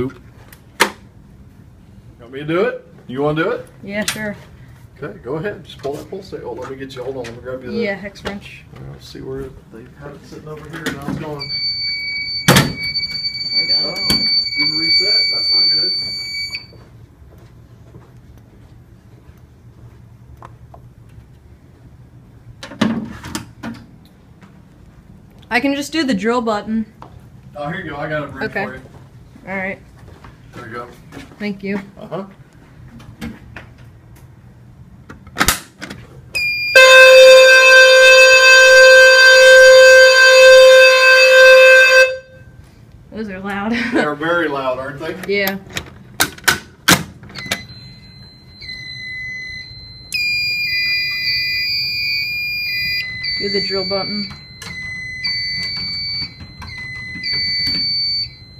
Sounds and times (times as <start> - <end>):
Fire alarm: 11.4 - 16.8, 36.4 - 42.5, 47.4 - 58.5.